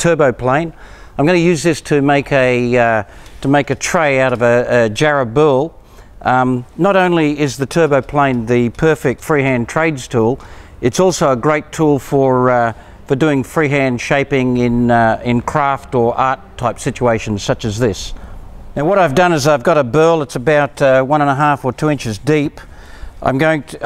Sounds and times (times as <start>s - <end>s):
Speech: 0.0s - 18.2s, 18.8s - 23.8s.